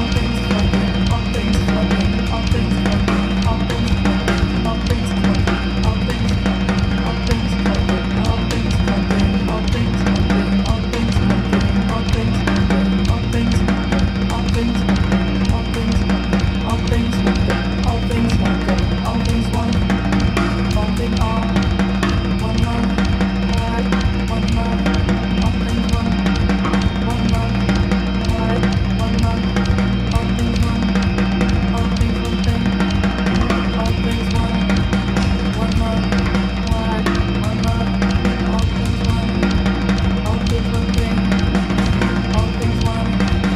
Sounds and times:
Music: 0.0 - 43.5.

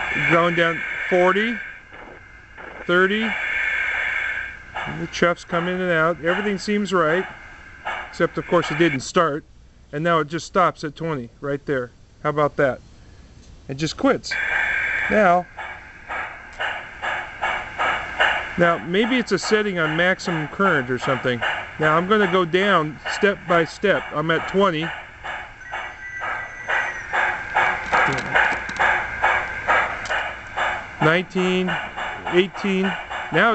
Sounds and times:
Train: 0.0 - 11.2, 12.1 - 33.5.

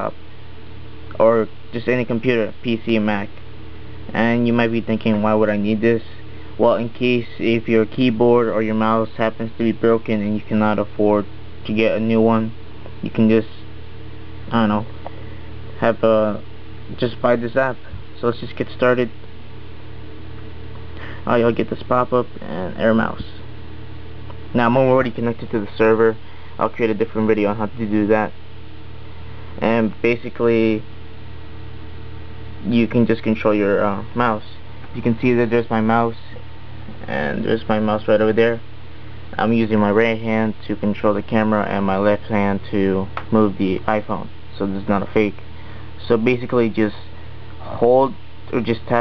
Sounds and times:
Speech: 0.0 - 0.2, 1.1 - 3.4, 4.1 - 13.7, 14.5 - 14.9, 15.8 - 19.2, 21.2 - 23.5, 24.5 - 28.4, 29.6 - 30.9, 32.6 - 38.7, 39.3 - 45.4, 46.0 - 49.0.

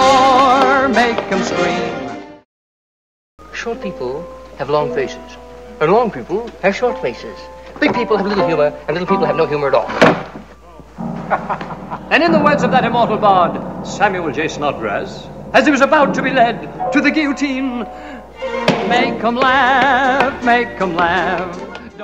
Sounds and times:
Music: 0.0 - 2.4, 3.4 - 9.9, 10.6 - 22.0
Speech: 3.5 - 10.0, 12.1 - 17.9.

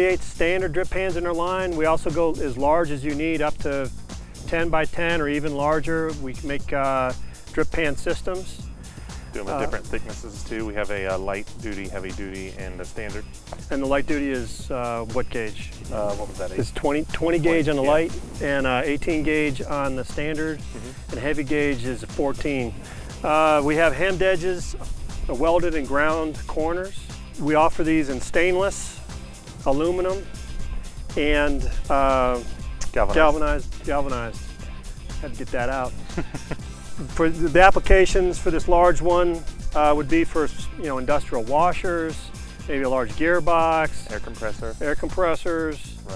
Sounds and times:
Speech: 0.0 - 3.9, 4.5 - 8.6, 9.4 - 29.0, 29.7 - 30.3, 31.1 - 34.4, 35.2 - 35.9, 37.1 - 46.1
Music: 0.0 - 46.1.

